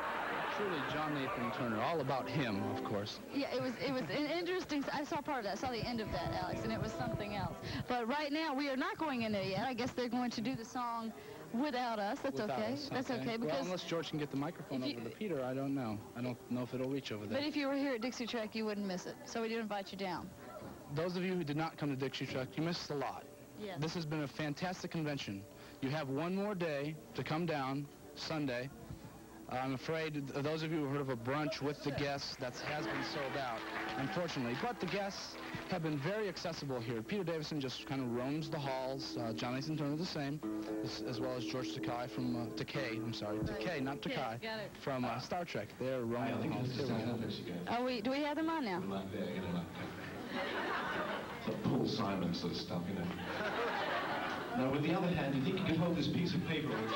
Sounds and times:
Music: 0:00.0 - 0:56.9.

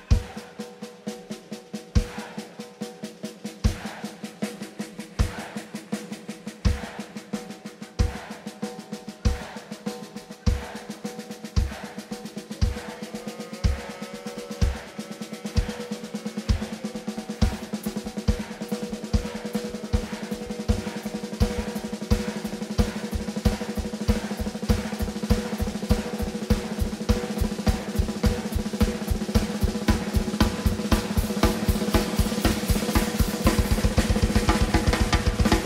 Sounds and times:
Rock and roll: 0:00.0 - 0:35.6.

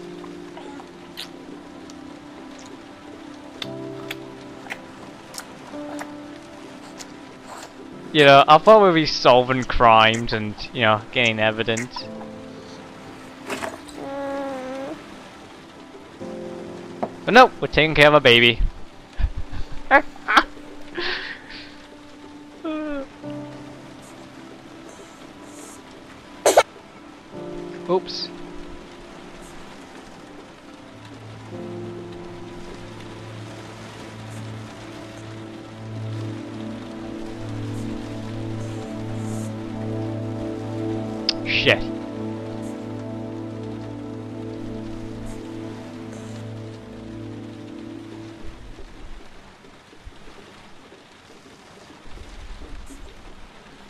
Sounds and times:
Rain on surface: 0:00.0 - 0:53.8.

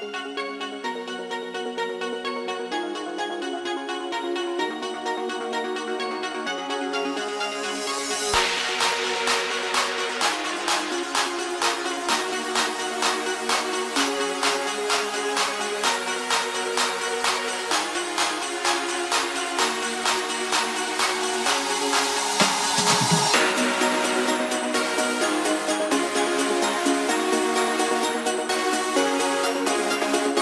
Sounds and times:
Dance music: 0:00.0 - 0:30.4
House music: 0:00.0 - 0:30.4
Soundtrack music: 0:00.0 - 0:30.4.

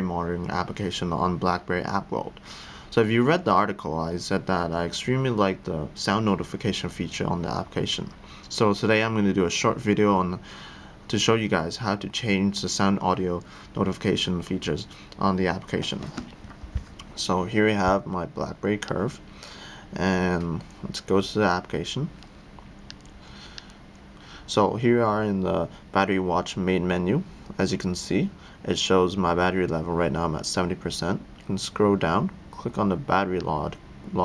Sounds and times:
Speech: 0:00.0 - 0:10.4, 0:11.1 - 0:16.3, 0:17.2 - 0:19.2, 0:20.0 - 0:22.2, 0:24.5 - 0:34.2.

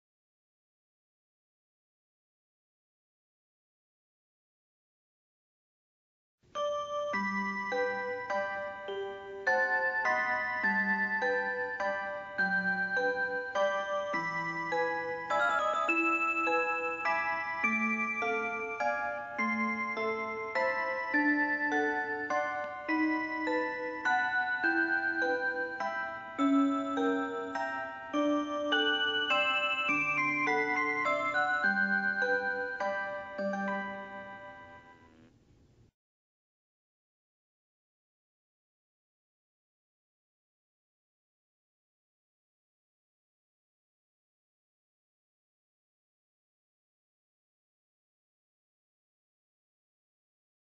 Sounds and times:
Music: 0:06.5 - 0:35.4.

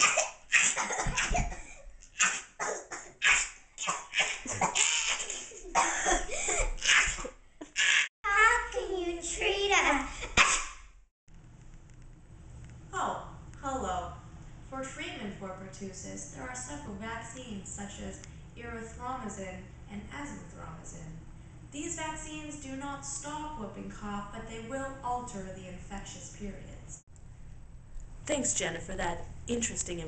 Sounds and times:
Cough: 0:00.0 - 0:08.0, 0:10.2 - 0:10.8
Speech: 0:08.2 - 0:10.1, 0:13.0 - 0:21.2, 0:21.8 - 0:27.0, 0:28.3 - 0:30.0.

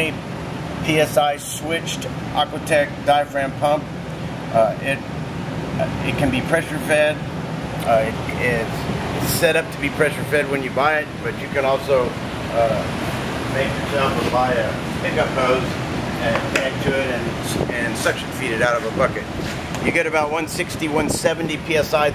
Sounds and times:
Speech: 0:00.0 - 0:00.2, 0:00.8 - 0:03.9, 0:04.5 - 0:05.0, 0:05.8 - 0:12.9, 0:13.5 - 0:22.1.

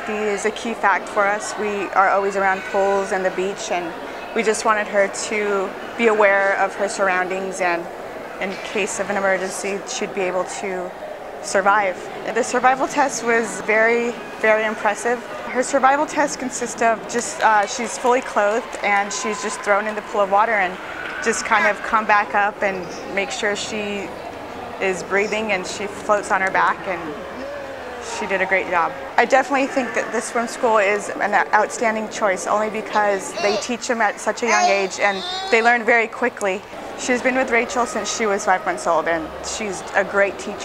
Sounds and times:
Speech: 0:00.0 - 0:24.1, 0:24.8 - 0:40.6.

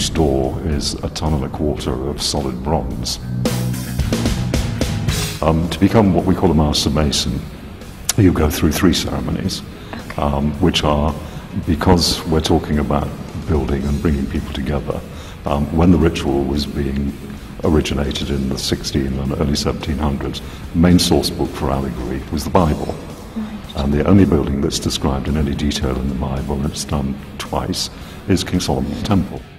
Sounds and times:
Speech: 0:00.0 - 0:03.2, 0:05.4 - 0:07.5, 0:08.1 - 0:29.5
Music: 0:00.0 - 0:29.5.

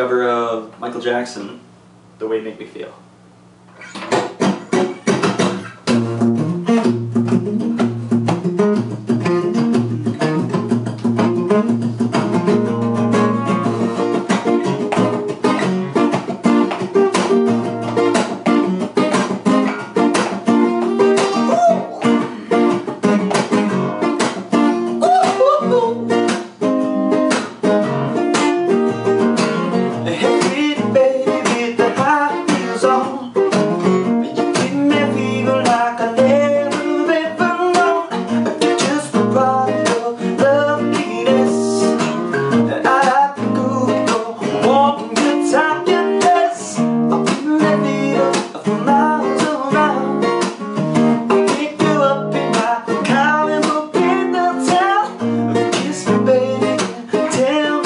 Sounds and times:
Guitar: 0:00.0 - 0:57.8.

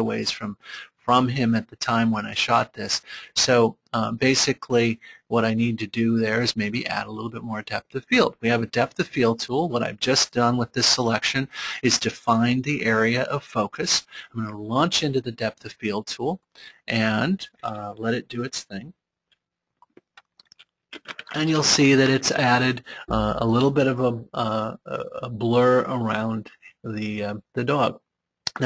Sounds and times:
Speech: 0:00.0 - 0:19.0, 0:21.0 - 0:28.6.

